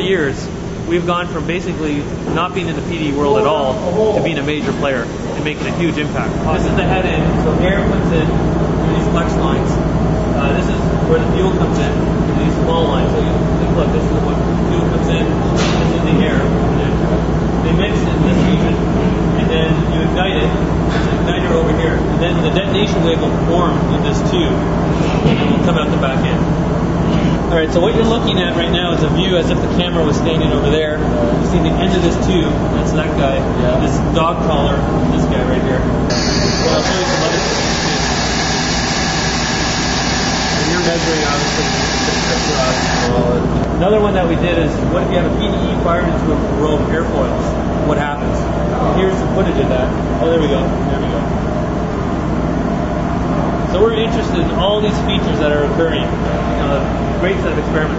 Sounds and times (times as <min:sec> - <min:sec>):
Speech: 0:00.0 - 0:26.5, 0:27.4 - 0:35.9, 0:36.5 - 0:37.8, 0:40.5 - 0:51.3, 0:53.7 - 0:57.9.